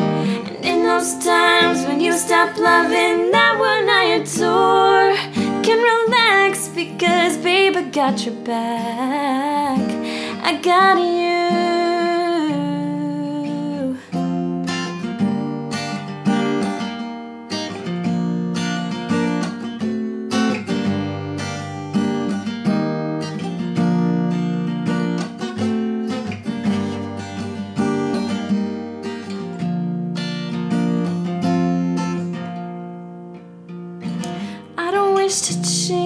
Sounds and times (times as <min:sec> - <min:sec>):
Acoustic guitar: 0:00.0 - 0:36.0.